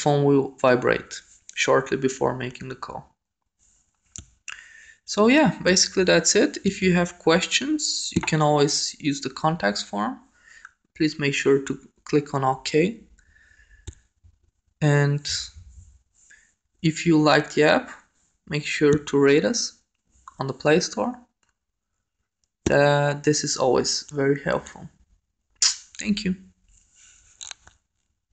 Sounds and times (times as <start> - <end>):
Speech: 0.0 - 3.1, 5.1 - 10.3, 11.0 - 13.1, 14.8 - 15.6, 16.8 - 21.3, 22.7 - 24.9, 25.6 - 26.4.